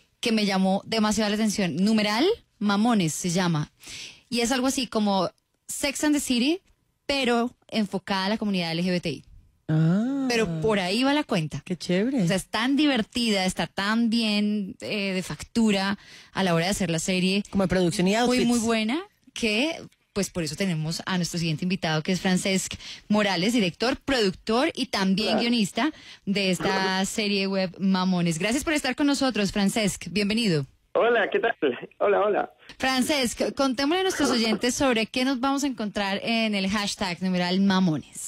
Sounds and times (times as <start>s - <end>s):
Speech: 16.8s - 19.9s, 23.3s - 25.7s, 26.3s - 27.5s, 31.0s - 36.7s.